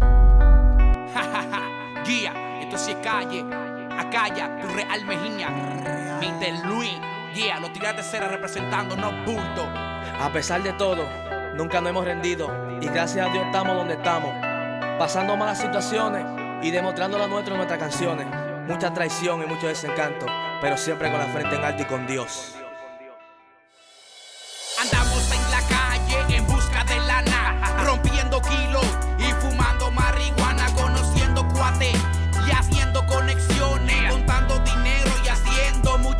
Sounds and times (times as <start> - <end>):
Music: 0.0 - 36.1
Speech: 2.1 - 3.4, 4.0 - 14.3, 15.0 - 22.6.